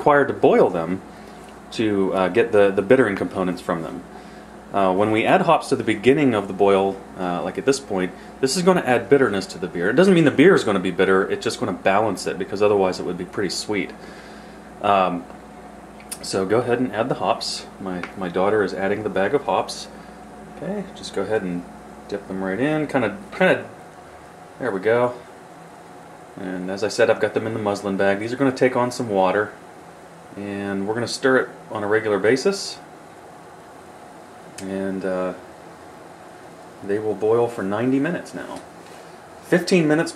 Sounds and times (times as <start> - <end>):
Speech: 0.0 - 1.0, 1.7 - 4.1, 4.7 - 14.0, 14.8 - 15.3, 16.1 - 23.8, 24.6 - 25.3, 26.4 - 29.6, 30.3 - 32.9, 34.6 - 35.4, 36.8 - 38.7, 39.5 - 40.1
Boiling: 0.0 - 40.1.